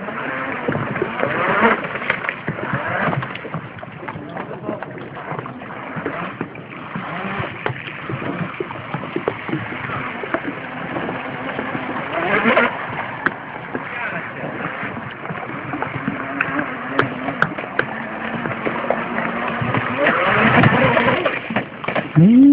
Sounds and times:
Boat, Water vehicle: 0.0 - 22.5
Speech: 4.2 - 5.0, 13.8 - 14.5.

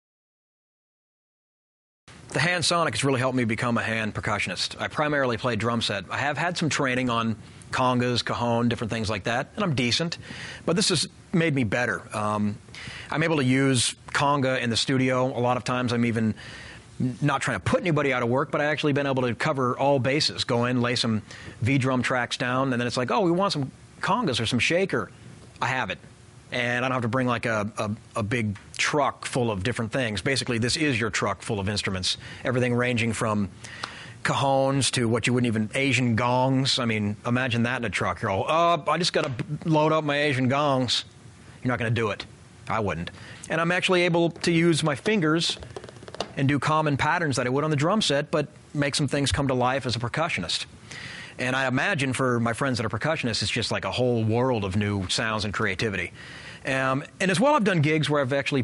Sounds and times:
Speech: 2.3 - 16.4, 17.0 - 33.5, 34.2 - 45.6, 46.4 - 50.7, 51.4 - 56.1, 56.7 - 58.6.

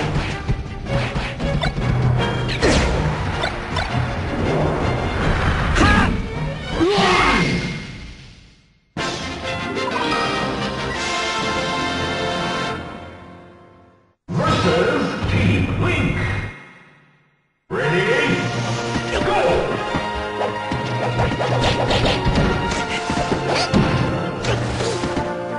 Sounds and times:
Music: 0.0 - 25.5
Speech: 14.3 - 16.5, 17.7 - 18.5, 19.1 - 19.8.

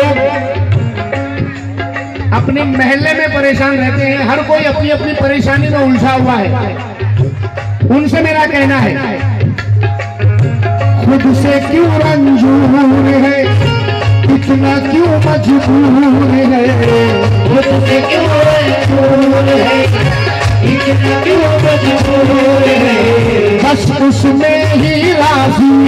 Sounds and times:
Middle Eastern music: 0.0 - 25.8
Speech: 2.3 - 7.0, 7.9 - 9.4.

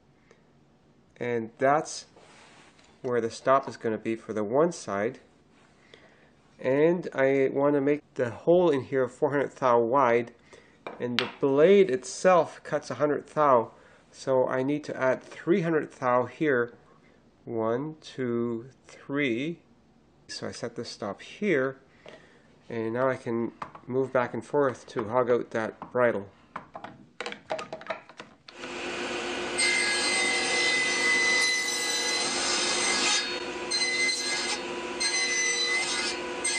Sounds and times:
Speech: 1.2 - 2.2, 3.1 - 5.3, 6.6 - 10.4, 11.0 - 16.8, 17.5 - 19.6, 20.3 - 21.8, 22.7 - 26.3.

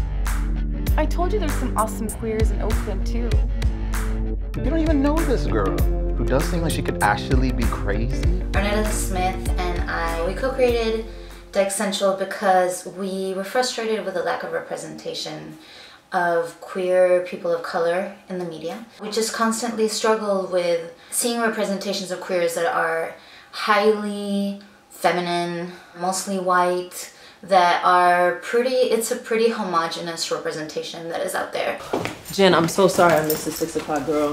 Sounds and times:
Music: 0.0 - 12.5
Speech: 1.0 - 3.4, 4.6 - 11.0, 16.2 - 34.3.

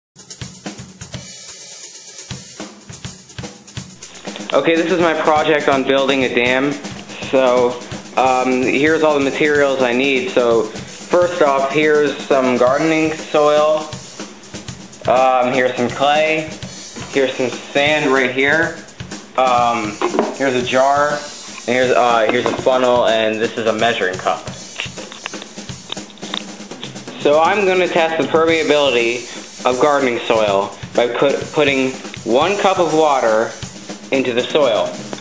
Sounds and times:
Hi-hat: 0.2 - 34.1
Drum kit: 0.2 - 35.2
Bass drum: 2.3 - 35.2
Speech: 4.4 - 13.9, 15.0 - 18.8, 19.4 - 24.6, 27.1 - 35.0.

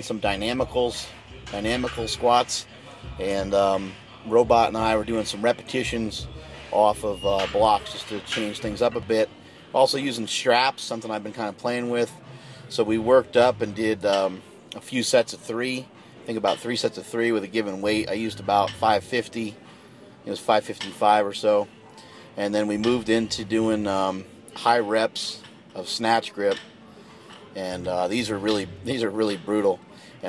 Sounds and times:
Speech: 0.0 - 19.6, 20.2 - 21.7, 22.4 - 26.7, 27.5 - 30.2.

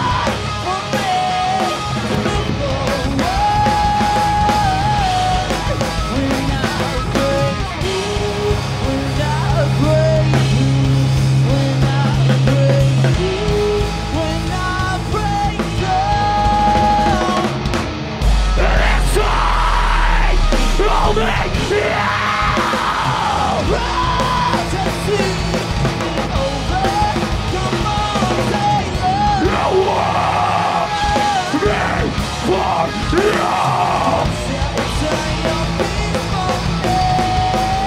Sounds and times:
Music: 0.0 - 37.8.

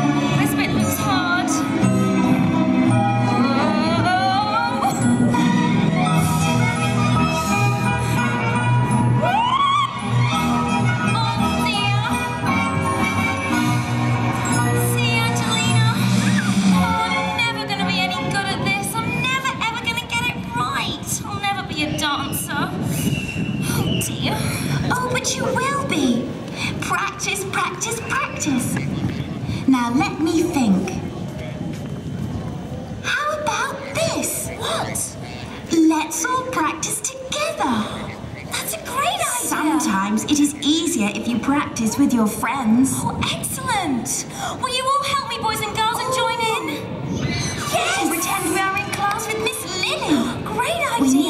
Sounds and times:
Music: 0.0 - 24.0
Speech: 0.3 - 1.7, 17.3 - 22.9, 23.7 - 31.6, 33.0 - 46.9, 47.6 - 51.2.

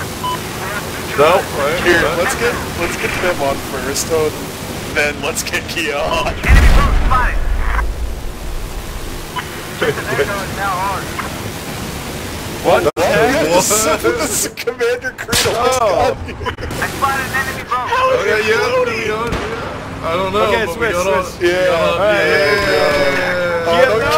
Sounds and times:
Pink noise: 0.0 - 12.8.

